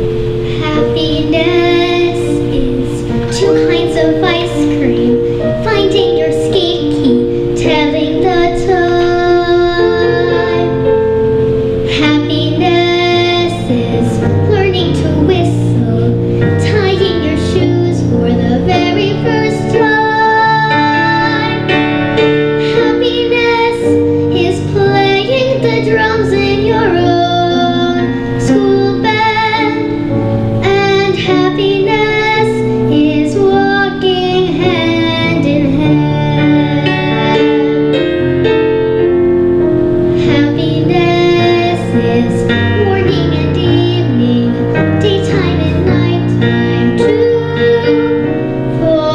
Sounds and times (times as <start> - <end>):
Music: 0.0 - 49.1
Child singing: 0.5 - 11.0, 11.9 - 21.8, 22.6 - 37.9, 40.2 - 49.1.